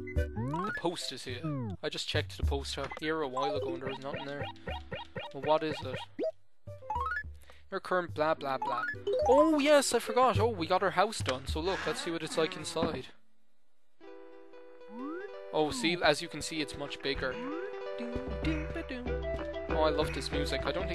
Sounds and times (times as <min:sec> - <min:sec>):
Music: 0:00.0 - 0:11.7, 0:14.0 - 0:20.9
Speech: 0:00.5 - 0:04.5, 0:05.4 - 0:06.0, 0:07.7 - 0:13.2, 0:15.6 - 0:17.4, 0:18.0 - 0:19.1, 0:19.7 - 0:20.9.